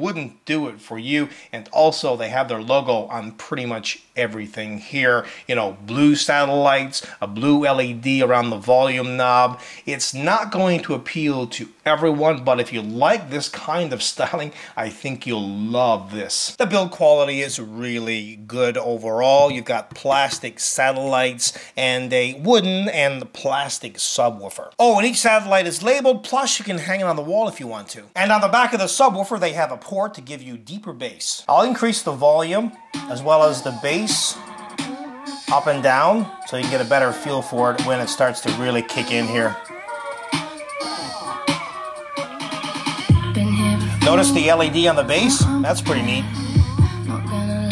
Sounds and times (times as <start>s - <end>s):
Speech: 0.0s - 34.4s, 35.5s - 39.6s, 44.0s - 46.3s
Music: 32.7s - 47.7s.